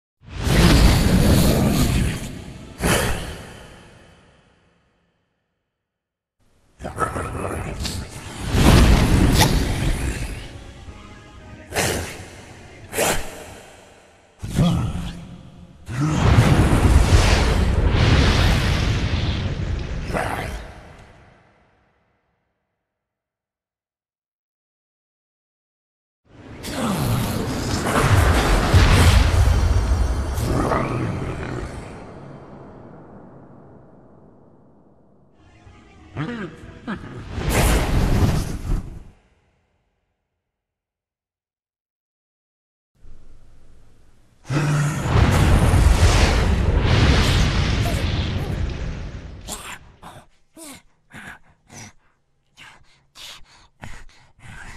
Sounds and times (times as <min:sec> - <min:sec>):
Sound effect: 0:00.2 - 0:05.8, 0:06.8 - 0:22.6, 0:26.3 - 0:40.2, 0:43.0 - 0:50.3.